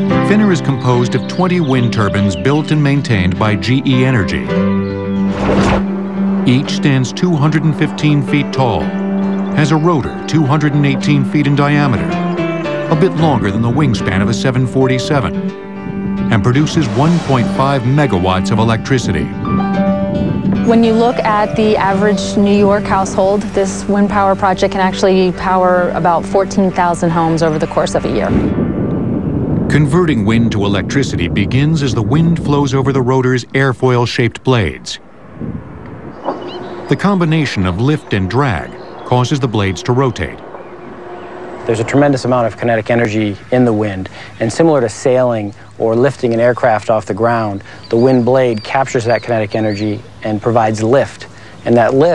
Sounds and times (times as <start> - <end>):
Music: 0.0 - 33.5, 36.3 - 52.1
Speech: 0.2 - 4.6, 6.5 - 8.9, 9.6 - 12.2, 12.9 - 15.4, 16.3 - 19.4, 20.7 - 28.4, 29.7 - 35.0, 36.9 - 40.4, 41.7 - 52.1.